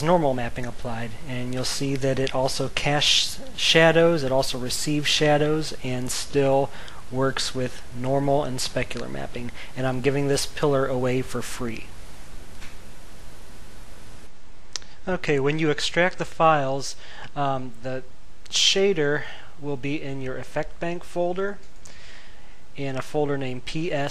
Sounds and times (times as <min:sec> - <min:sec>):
Speech: 0:00.0 - 0:11.9, 0:14.8 - 0:21.6, 0:22.8 - 0:24.1.